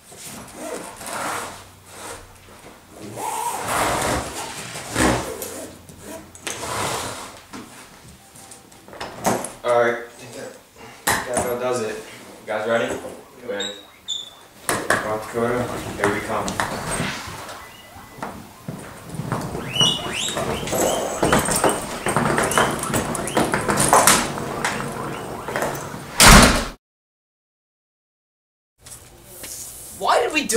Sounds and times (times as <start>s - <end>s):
Speech: 11.2s - 13.8s, 15.0s - 16.6s, 30.0s - 30.5s.